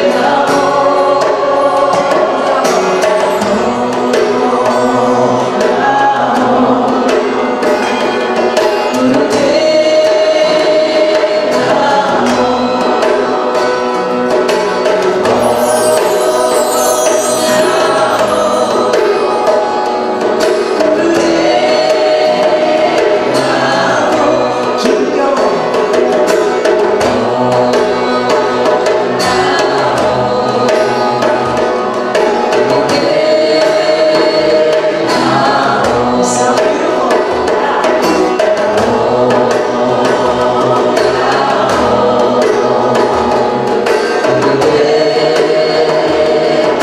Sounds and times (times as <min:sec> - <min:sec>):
Mantra: 0:00.0 - 0:46.8.